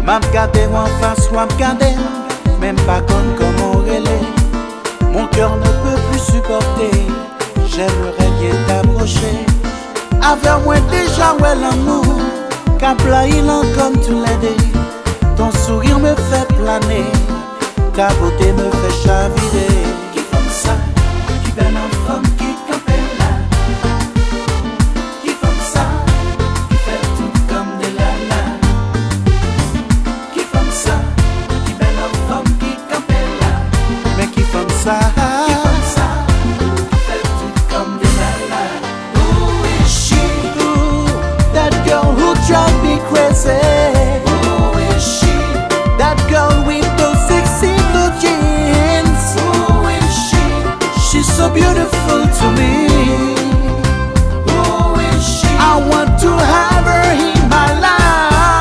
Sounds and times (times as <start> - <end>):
Soundtrack music: 0.0 - 58.6.